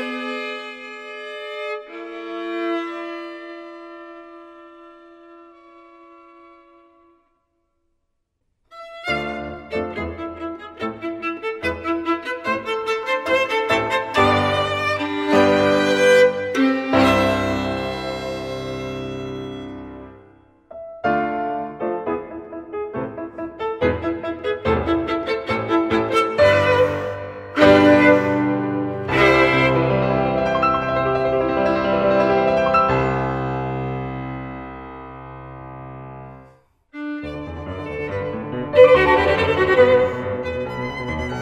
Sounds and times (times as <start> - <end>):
Violin, fiddle: 0.0 - 7.3, 8.7 - 20.2, 23.6 - 31.5, 37.0 - 41.4.